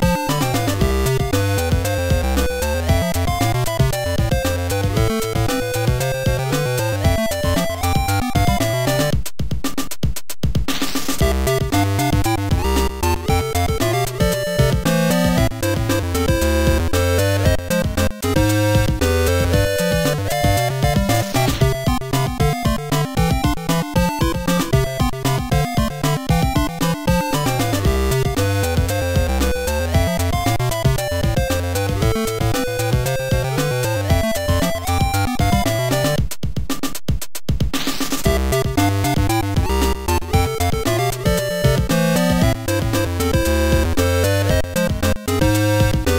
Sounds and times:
Background music: 0.0s - 9.9s, 10.6s - 37.1s, 37.7s - 46.1s
Video game music: 0.0s - 46.1s.

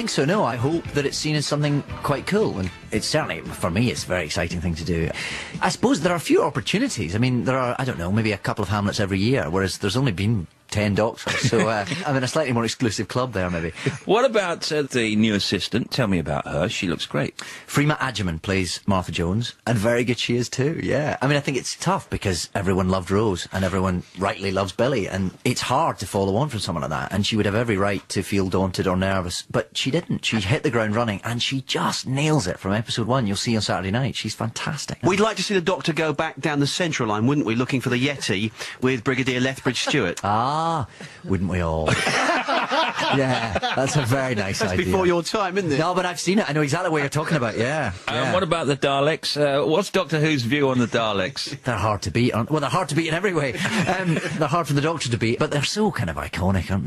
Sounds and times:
Speech: 0.0s - 42.1s, 43.0s - 56.8s.

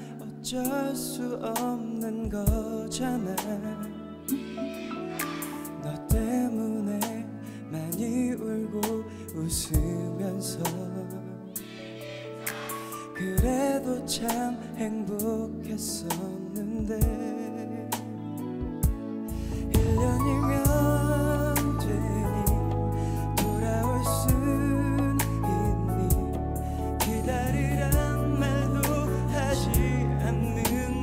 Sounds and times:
Music: 0.0s - 31.0s.

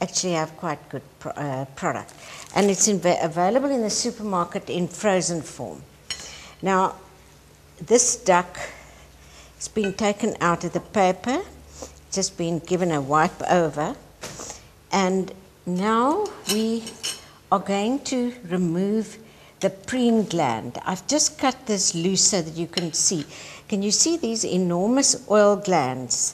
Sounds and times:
Speech: 0.0s - 5.9s, 6.6s - 7.0s, 7.8s - 8.7s, 9.6s - 14.0s, 14.9s - 26.3s.

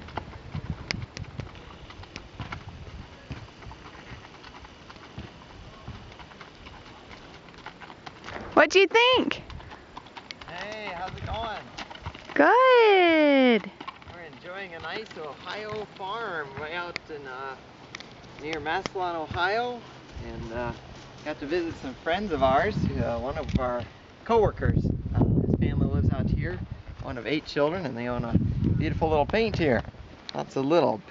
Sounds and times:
Clip-clop: 0.0s - 31.1s
Speech: 10.5s - 11.7s, 18.4s - 24.8s.

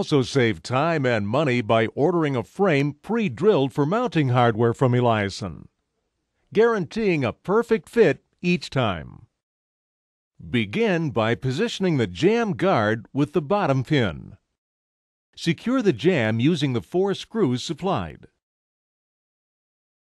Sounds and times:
Speech: 0.0s - 5.7s, 6.5s - 9.3s, 10.4s - 14.4s, 15.4s - 18.4s.

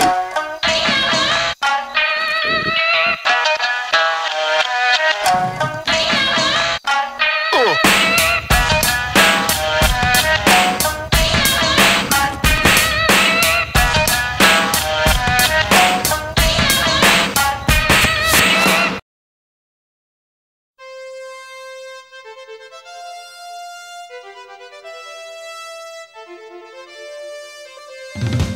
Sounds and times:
Music: 0.0s - 19.0s, 20.8s - 28.5s.

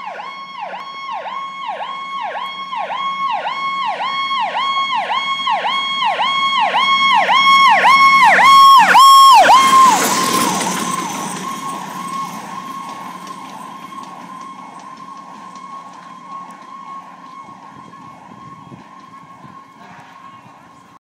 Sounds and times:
Fire engine, fire truck (siren): 0.0s - 21.0s
Truck: 0.0s - 21.0s.

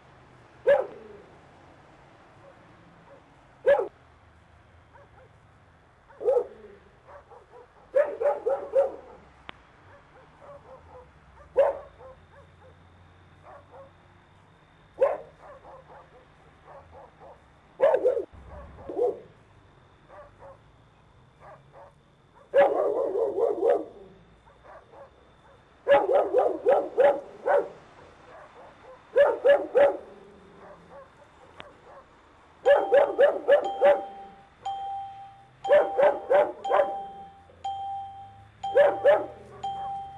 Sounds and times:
Bow-wow: 0.6s - 1.2s, 2.4s - 4.0s, 4.9s - 5.4s, 6.1s - 9.3s, 9.9s - 12.8s, 13.4s - 14.0s, 15.0s - 19.3s, 20.1s - 20.7s, 21.4s - 34.4s, 35.6s - 37.3s, 38.7s - 40.1s.

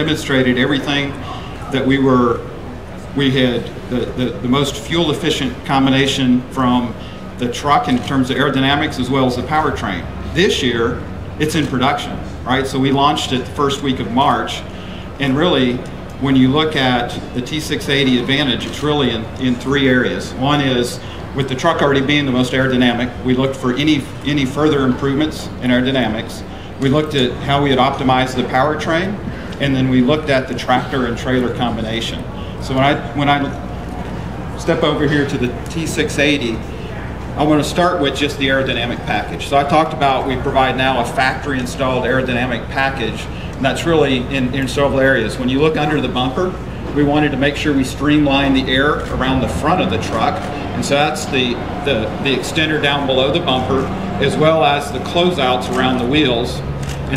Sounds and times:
Speech: 0.0s - 33.7s, 34.6s - 57.1s.

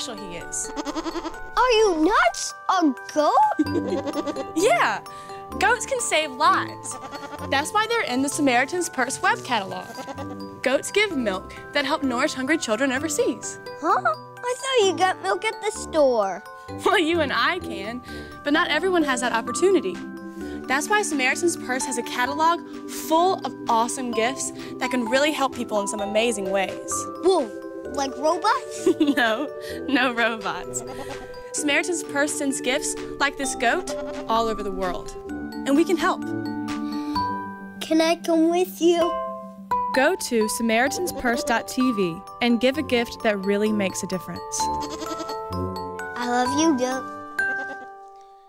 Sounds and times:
Music: 0.0s - 48.4s
Child speech, kid speaking: 1.6s - 3.6s, 13.8s - 17.2s, 27.2s - 28.7s, 37.8s - 39.2s, 46.1s - 47.1s.

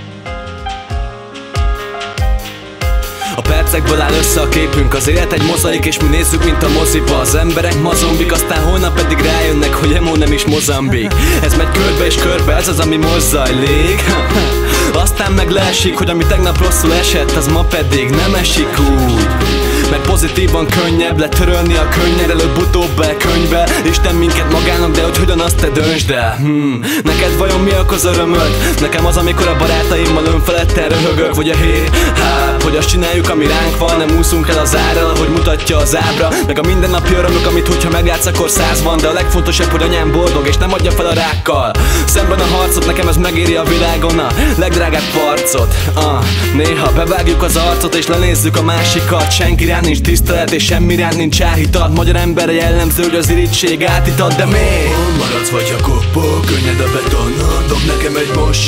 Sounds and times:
Music: 0.0s - 58.6s.

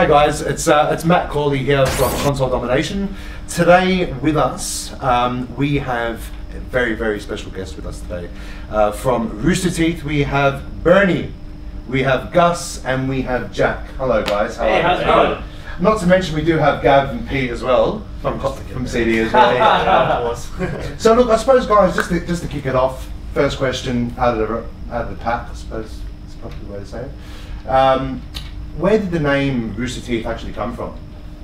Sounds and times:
Speech: 0.0s - 31.0s.

